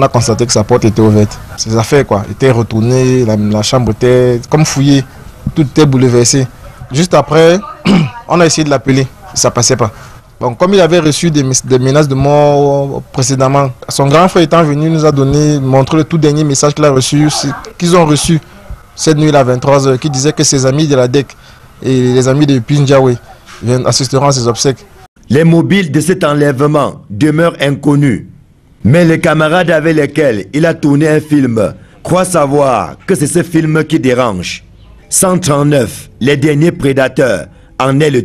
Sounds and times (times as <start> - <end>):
Speech: 0.0 - 28.3, 28.9 - 38.2.